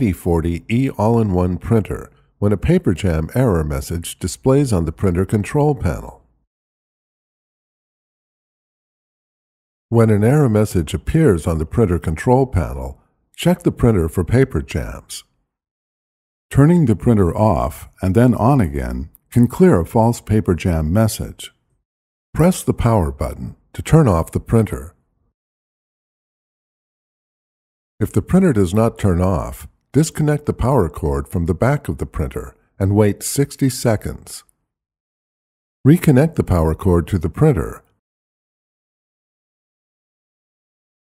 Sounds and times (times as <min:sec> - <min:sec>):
Speech: 0:00.0 - 0:06.3, 0:09.9 - 0:15.3, 0:16.5 - 0:21.6, 0:22.4 - 0:25.0, 0:28.0 - 0:34.5, 0:35.9 - 0:38.0.